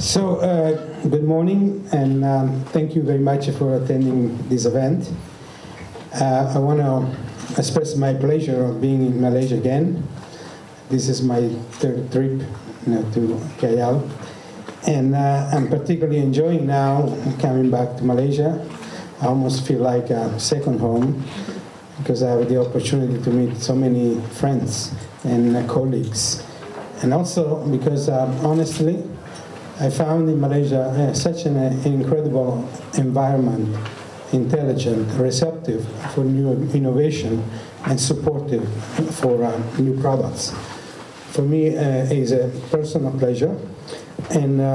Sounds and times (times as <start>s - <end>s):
Male speech, man speaking: 0.0s - 5.2s, 6.1s - 10.2s, 10.9s - 14.2s, 14.8s - 21.4s, 22.0s - 29.2s, 29.8s - 40.6s, 41.3s - 44.7s
Narration, monologue: 0.0s - 44.7s.